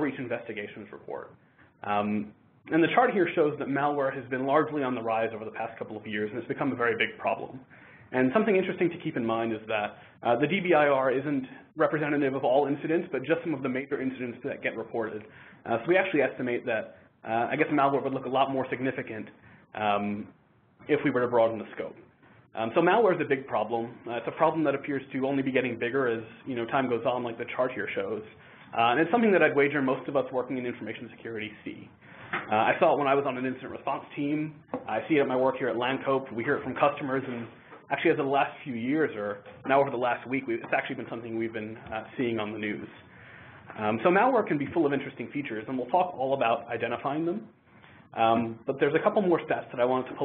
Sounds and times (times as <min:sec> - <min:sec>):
Speech: 0:00.0 - 0:43.1, 0:43.7 - 0:50.2.